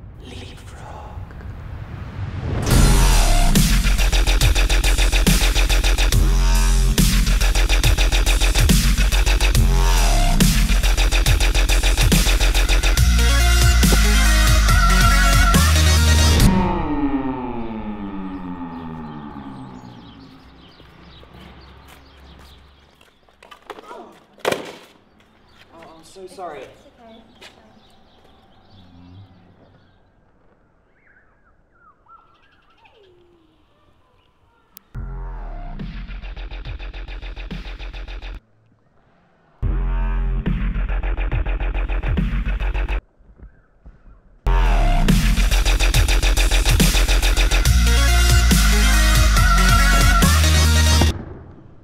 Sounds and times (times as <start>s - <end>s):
Speech: 0.2s - 1.2s, 25.7s - 27.8s.